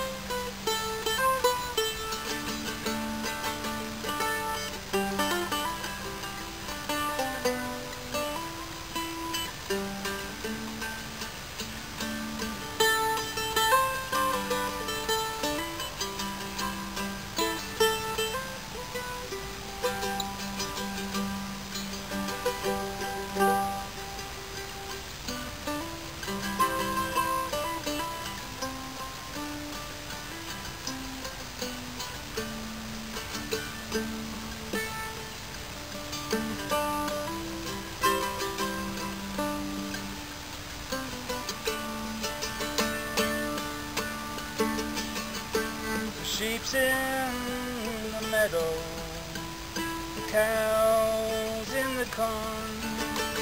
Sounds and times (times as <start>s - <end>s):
Music: 0.0s - 53.4s.